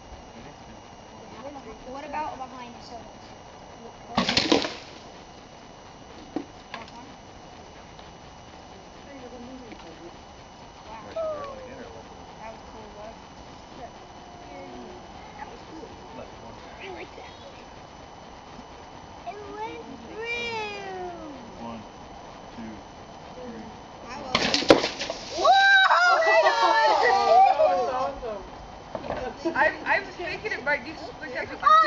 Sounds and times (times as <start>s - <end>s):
Thump, thud: 24.4s - 25.2s.